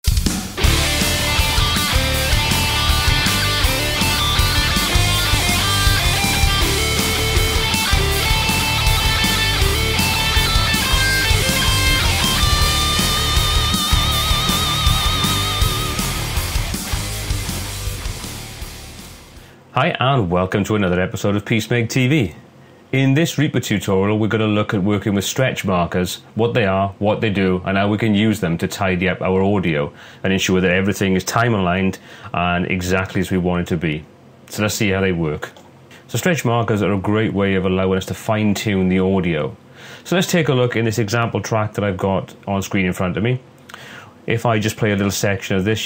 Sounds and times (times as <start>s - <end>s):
Heavy metal: 0.1s - 19.5s
Speech: 19.7s - 43.4s, 44.3s - 45.8s.